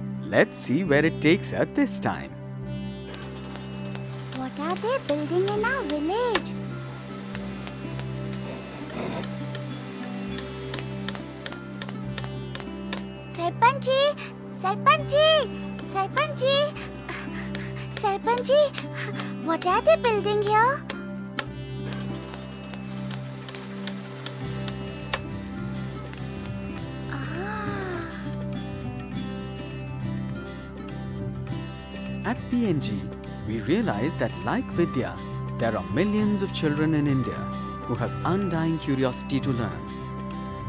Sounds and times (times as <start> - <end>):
Music: 0.0 - 40.6
Speech: 13.4 - 16.8, 18.0 - 18.8, 19.4 - 20.8, 32.3 - 39.8.